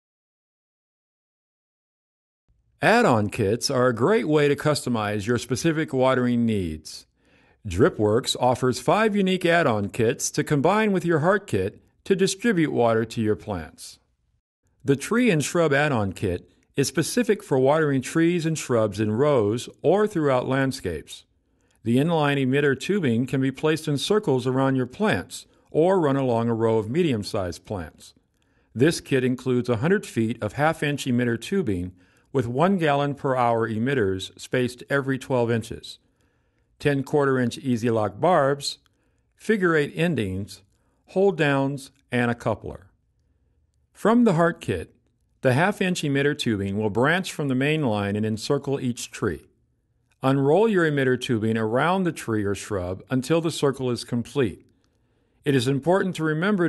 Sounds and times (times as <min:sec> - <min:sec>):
Speech: 0:02.8 - 0:14.0, 0:14.8 - 0:28.2, 0:28.8 - 0:36.0, 0:36.8 - 0:38.8, 0:39.4 - 0:43.0, 0:44.0 - 0:49.5, 0:50.2 - 0:54.7, 0:55.5 - 0:56.6.